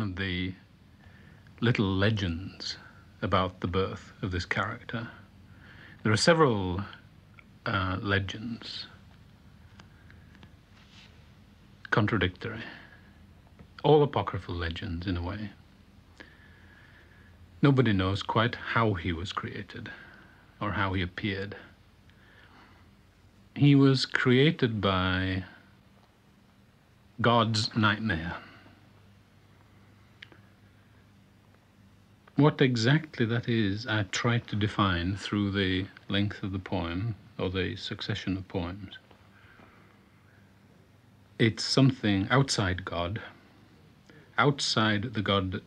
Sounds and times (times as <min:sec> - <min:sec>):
Speech: 0:00.0 - 0:00.7, 0:01.6 - 0:05.3, 0:06.0 - 0:07.0, 0:07.6 - 0:09.0, 0:11.8 - 0:13.0, 0:13.8 - 0:15.6, 0:17.6 - 0:21.8, 0:23.5 - 0:25.7, 0:27.2 - 0:28.6, 0:32.3 - 0:39.0, 0:41.4 - 0:43.4, 0:44.0 - 0:45.6.